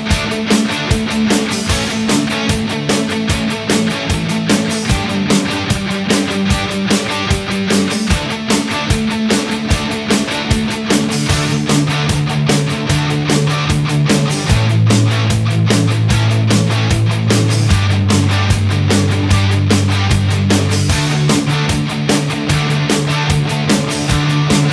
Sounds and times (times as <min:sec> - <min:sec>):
Music: 0:00.0 - 0:24.7.